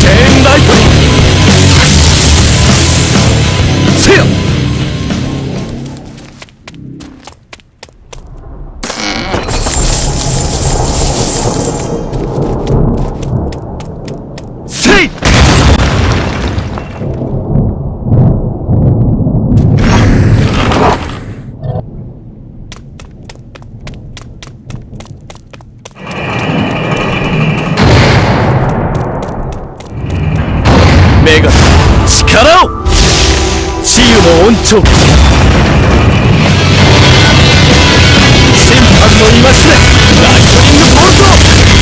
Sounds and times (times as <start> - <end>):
Music: 0.0 - 5.7, 32.6 - 41.8
Speech: 14.7 - 15.2, 33.8 - 34.9, 38.6 - 41.4
Boom: 15.2 - 21.1, 26.0 - 41.8.